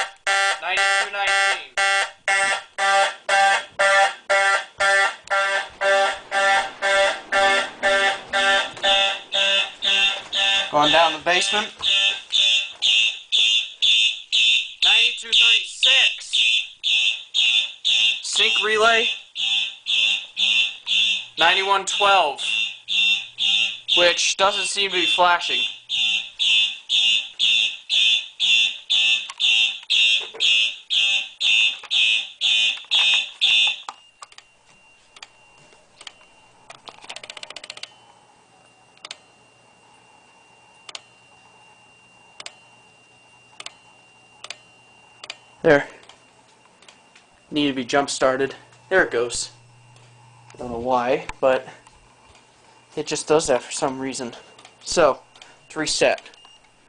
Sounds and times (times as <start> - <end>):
Speech: 0.6 - 1.8, 10.7 - 11.8, 14.8 - 16.4, 18.2 - 19.2, 21.4 - 22.6, 24.0 - 25.7, 45.6 - 46.0, 47.5 - 49.6, 50.6 - 51.8, 53.0 - 56.4.